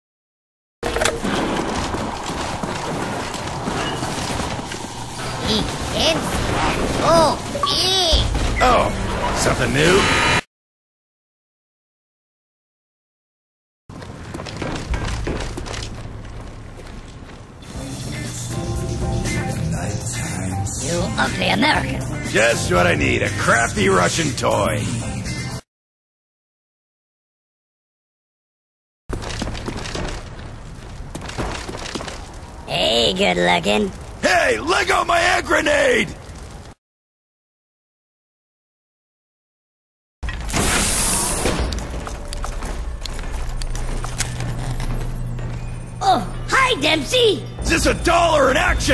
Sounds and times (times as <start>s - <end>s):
Music: 17.6s - 25.6s, 44.8s - 48.9s.